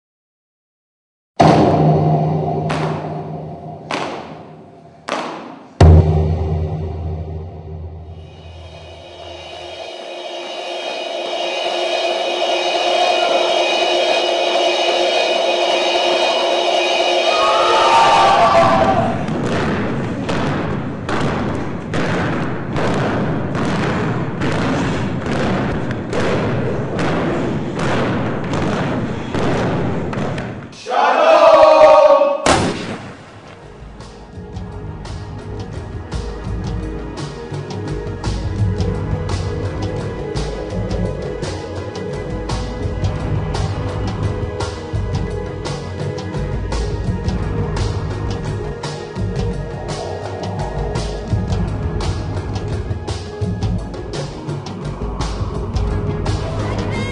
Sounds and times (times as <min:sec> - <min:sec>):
Music: 0:01.4 - 0:30.4, 0:33.3 - 0:57.1.